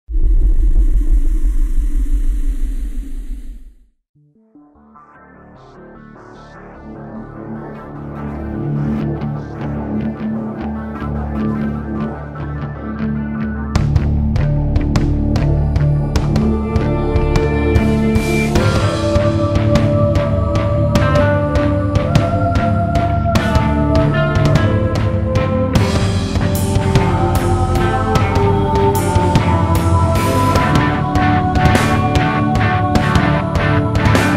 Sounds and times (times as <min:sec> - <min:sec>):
Music: 0:04.1 - 0:34.3.